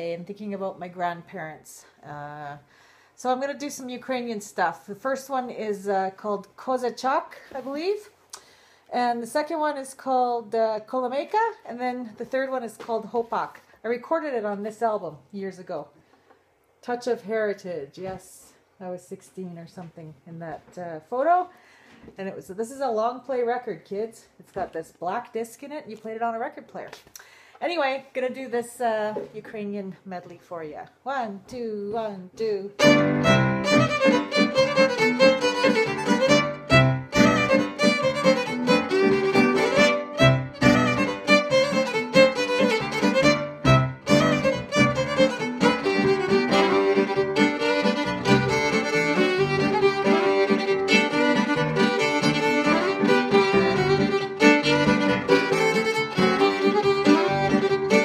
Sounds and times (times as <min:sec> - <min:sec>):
Speech: 0:00.0 - 0:08.1, 0:08.9 - 0:16.0, 0:16.8 - 0:21.5, 0:22.1 - 0:27.0, 0:27.6 - 0:32.8.